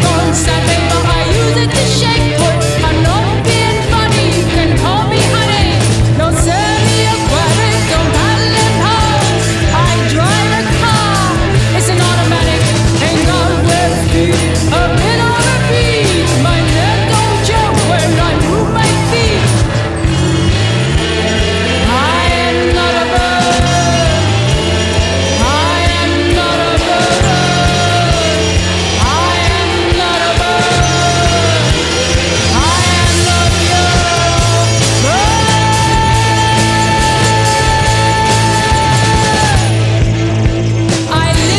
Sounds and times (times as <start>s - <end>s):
Music: 0.0s - 41.5s.